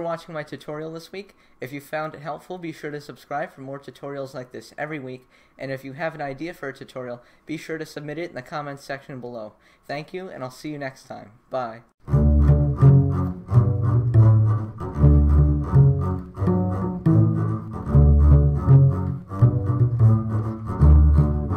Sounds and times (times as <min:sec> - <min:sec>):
Double bass: 0:12.0 - 0:21.5
Pizzicato: 0:12.0 - 0:21.5
Cello: 0:12.1 - 0:21.5.